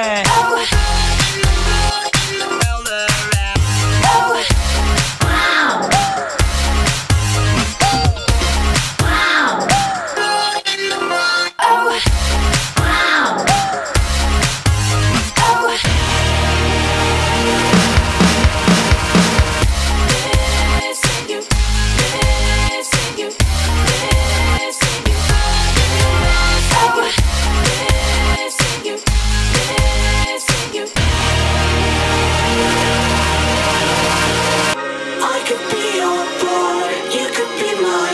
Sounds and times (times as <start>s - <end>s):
Music: 0.0s - 38.1s.